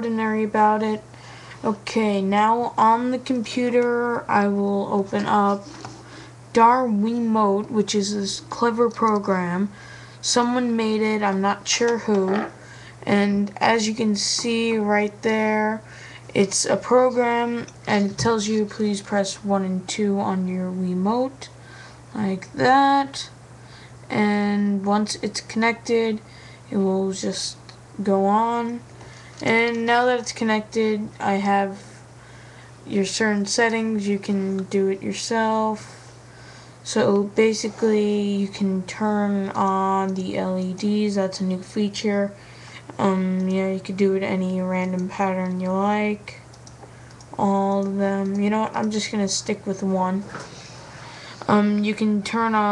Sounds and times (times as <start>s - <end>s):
Speech: 0.0s - 5.9s, 6.5s - 23.4s, 24.1s - 32.0s, 32.9s - 36.0s, 36.9s - 46.5s, 47.4s - 50.4s, 51.4s - 52.7s.